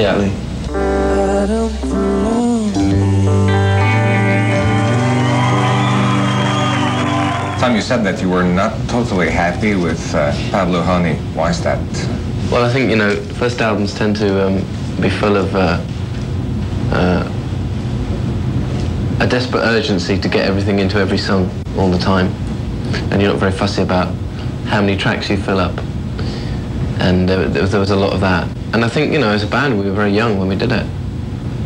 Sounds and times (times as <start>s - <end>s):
Pop music: 0.7s - 7.6s.